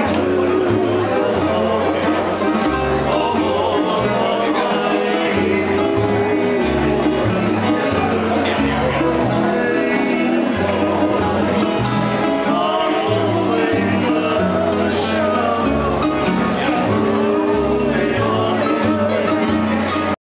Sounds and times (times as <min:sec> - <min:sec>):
Music: 0:00.0 - 0:20.2.